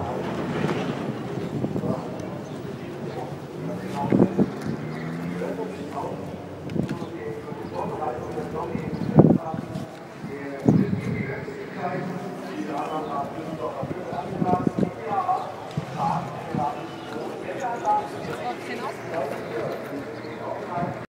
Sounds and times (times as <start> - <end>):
Speech: 0.0 - 21.1.